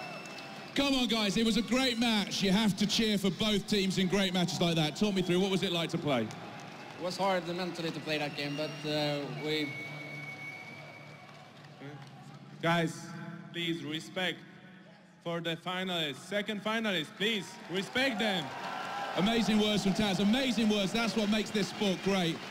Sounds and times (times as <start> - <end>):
Speech: 0.8 - 6.3, 15.3 - 18.5, 19.2 - 22.4.